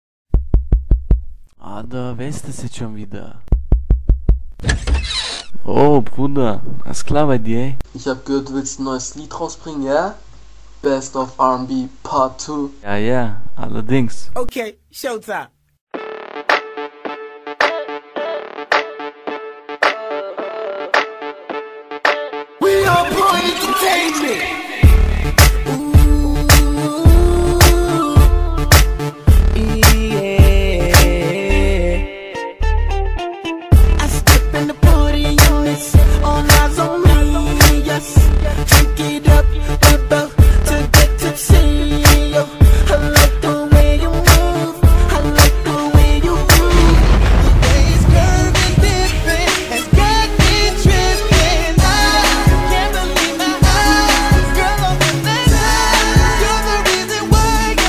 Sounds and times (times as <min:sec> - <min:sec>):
Speech: 0:01.6 - 0:03.5, 0:05.6 - 0:10.2, 0:10.8 - 0:15.5.